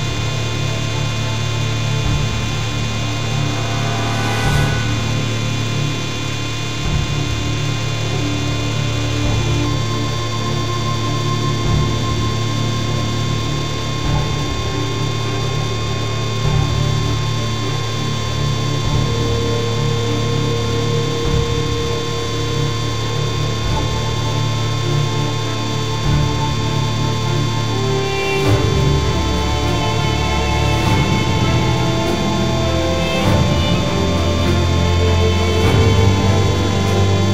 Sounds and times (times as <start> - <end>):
Music: 0.0 - 37.3.